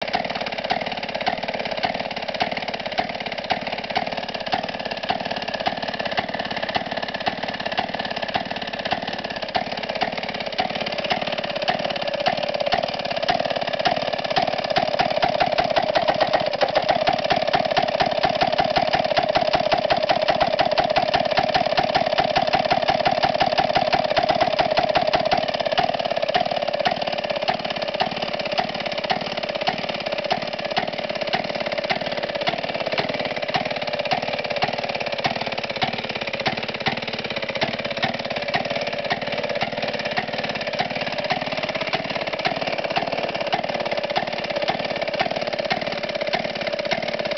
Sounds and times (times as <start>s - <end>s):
Heavy engine (low frequency): 0.0s - 47.3s.